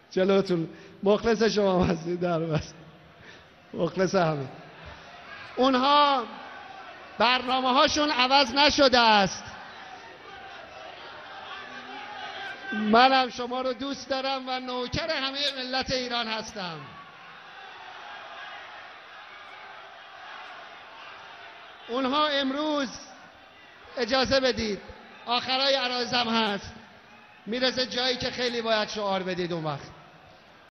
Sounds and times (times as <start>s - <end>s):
Narration, monologue: 0.0s - 3.0s, 3.7s - 4.7s, 5.6s - 6.4s, 7.2s - 9.6s, 12.7s - 17.0s, 21.9s - 23.2s, 23.9s - 30.0s
Male speech, man speaking: 0.1s - 2.8s, 3.8s - 4.6s, 5.6s - 6.3s, 7.2s - 9.5s, 12.7s - 16.9s, 21.9s - 23.1s, 24.0s - 26.8s, 27.5s - 29.9s.